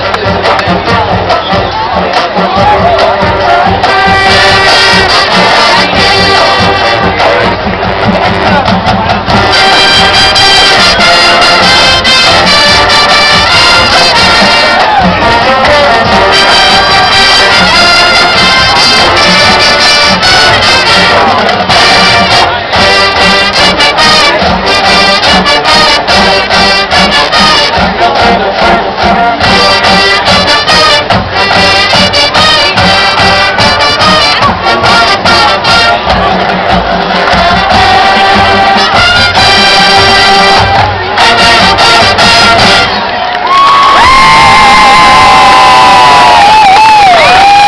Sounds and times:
Cheering: 0:00.0 - 0:47.6
Music: 0:00.0 - 0:47.6
Outside, urban or manmade: 0:00.0 - 0:47.6.

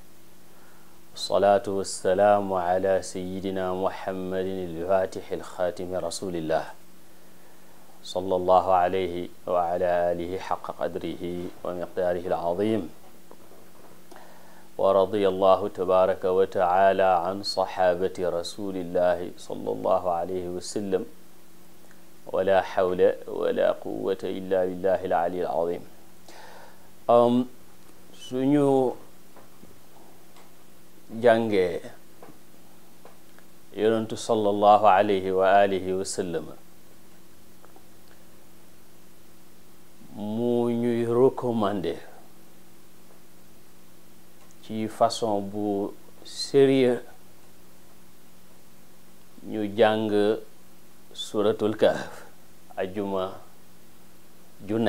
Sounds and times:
Speech: 0:01.2 - 0:06.8, 0:08.0 - 0:13.0, 0:14.8 - 0:21.2, 0:22.3 - 0:26.0, 0:27.1 - 0:27.6, 0:28.2 - 0:29.1, 0:31.1 - 0:32.0, 0:33.7 - 0:36.6, 0:40.0 - 0:42.2, 0:44.6 - 0:47.2, 0:49.4 - 0:50.5, 0:51.2 - 0:53.6, 0:54.6 - 0:54.8.

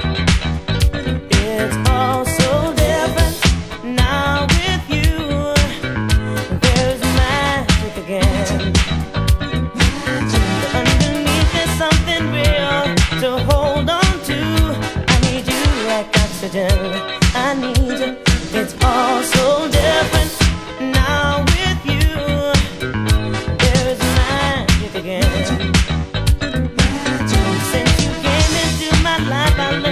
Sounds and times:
Disco: 0:00.0 - 0:29.9.

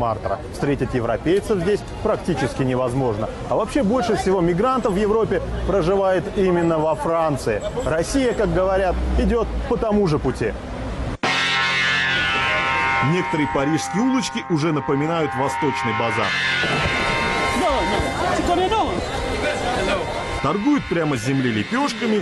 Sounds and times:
Music: 0:11.2 - 0:22.2
Speech: 0:13.0 - 0:16.3, 0:17.6 - 0:22.2.

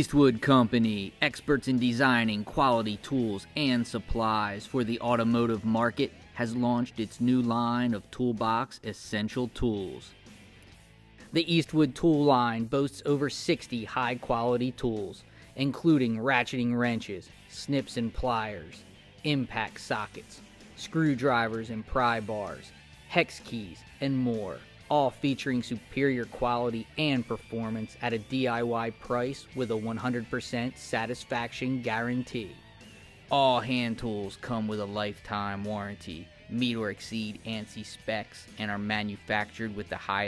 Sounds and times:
Speech: 0:00.0 - 0:10.2, 0:11.3 - 0:32.6, 0:33.3 - 0:40.2
Music: 0:00.0 - 0:40.2.

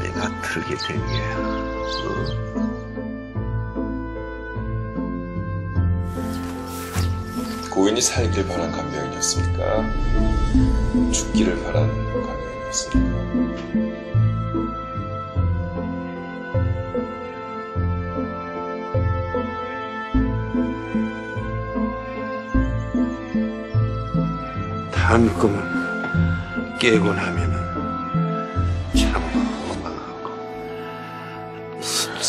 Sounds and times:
Music: 0:00.0 - 0:32.2
Speech: 0:07.7 - 0:10.0, 0:11.1 - 0:13.0, 0:25.0 - 0:25.8, 0:26.8 - 0:27.6.

